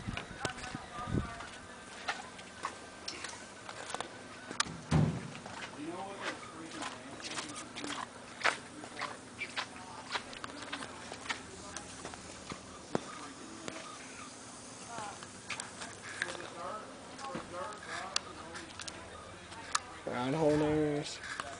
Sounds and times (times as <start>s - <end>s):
Speech: 0.2s - 1.8s, 14.8s - 21.5s.